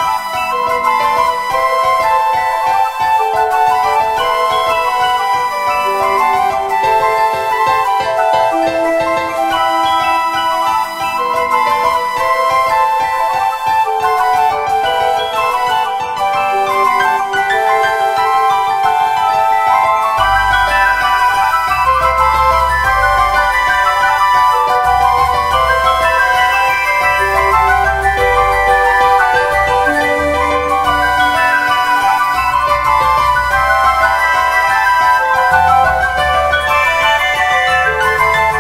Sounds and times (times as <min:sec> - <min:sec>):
Glockenspiel: 0:00.0 - 0:38.6
Marimba, xylophone: 0:00.0 - 0:38.6.